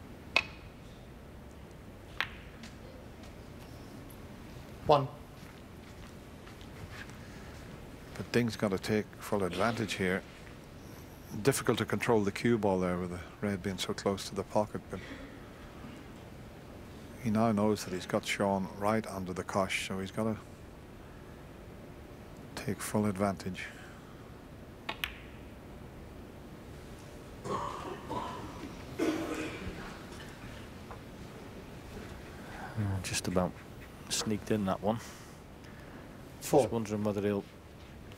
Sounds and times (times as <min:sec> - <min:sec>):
Speech: 0:04.8 - 0:05.2, 0:08.2 - 0:10.2, 0:11.3 - 0:15.1, 0:17.2 - 0:20.4, 0:22.6 - 0:23.8, 0:32.7 - 0:35.1, 0:36.4 - 0:37.5.